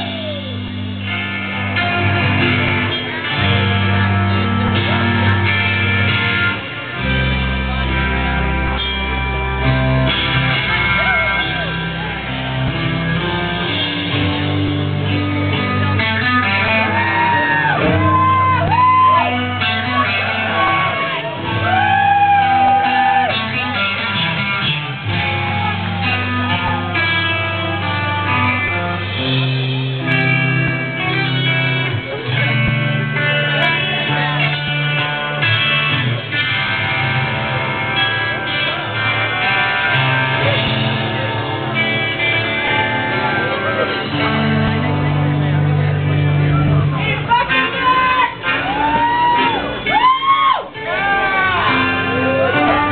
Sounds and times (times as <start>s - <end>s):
Music: 0.0s - 52.9s.